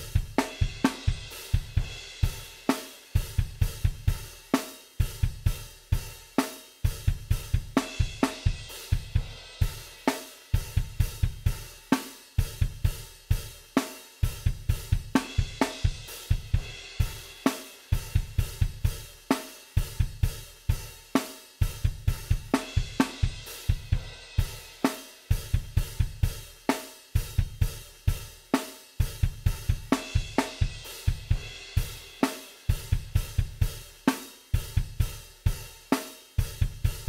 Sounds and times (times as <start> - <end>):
Drum machine: 0.0 - 37.0.